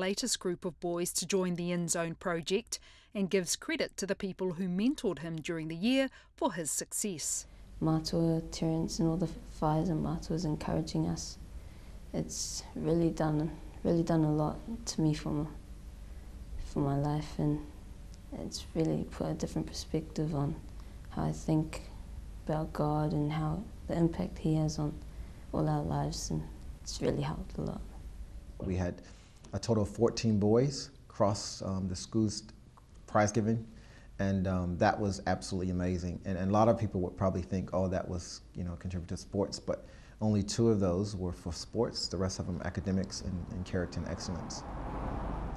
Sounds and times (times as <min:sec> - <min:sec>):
Speech: 0:00.0 - 0:11.4, 0:12.2 - 0:15.5, 0:16.7 - 0:17.6, 0:18.4 - 0:21.9, 0:22.5 - 0:25.0, 0:25.6 - 0:27.8, 0:28.6 - 0:32.5, 0:33.1 - 0:44.6.